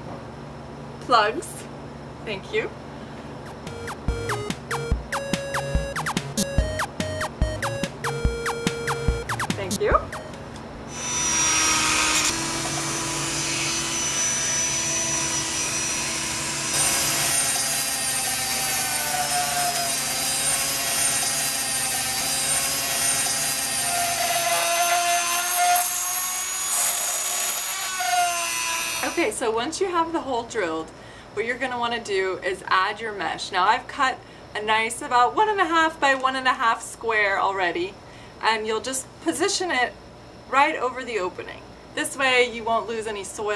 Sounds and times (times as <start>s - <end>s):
Drill: 13.8s - 29.2s.